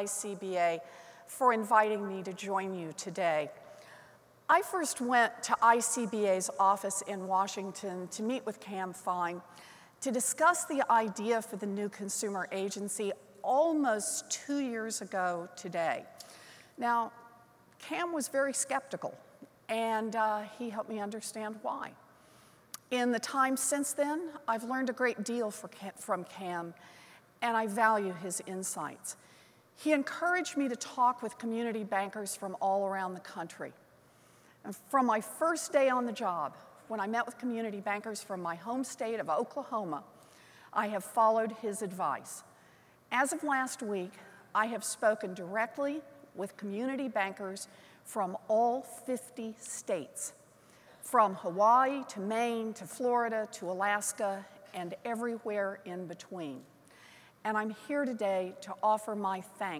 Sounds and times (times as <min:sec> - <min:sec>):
Narration, monologue: 0:00.0 - 0:59.7
Female speech, woman speaking: 0:01.4 - 0:03.5, 0:04.5 - 0:09.4, 0:10.0 - 0:16.0, 0:17.8 - 0:19.1, 0:19.7 - 0:21.9, 0:22.9 - 0:26.7, 0:27.4 - 0:29.2, 0:29.8 - 0:33.7, 0:34.7 - 0:40.0, 0:40.8 - 0:42.4, 0:43.2 - 0:50.4, 0:51.1 - 0:56.6, 0:57.5 - 0:59.7.